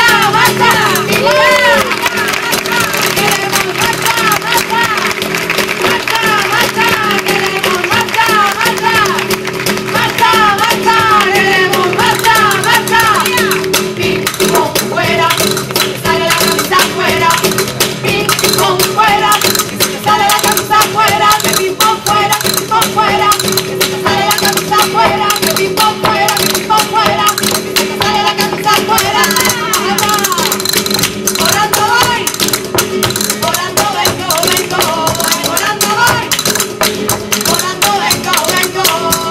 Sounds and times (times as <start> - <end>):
Music of Latin America: 0.0 - 39.3.